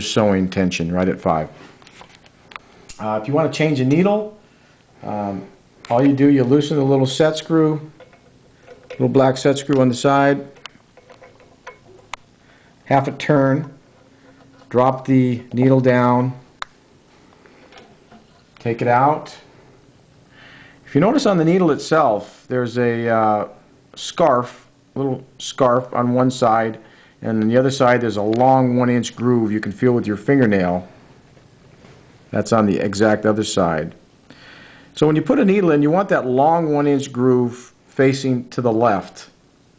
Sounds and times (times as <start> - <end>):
Speech: 0.0 - 1.6, 3.0 - 4.4, 5.0 - 8.0, 8.9 - 10.6, 12.9 - 13.8, 14.7 - 16.5, 18.6 - 19.5, 20.9 - 30.9, 32.3 - 34.0, 35.0 - 39.4.